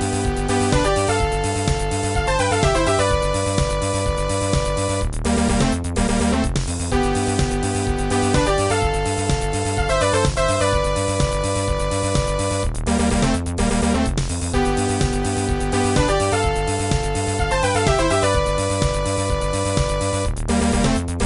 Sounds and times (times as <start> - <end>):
Music: 0.0 - 21.2.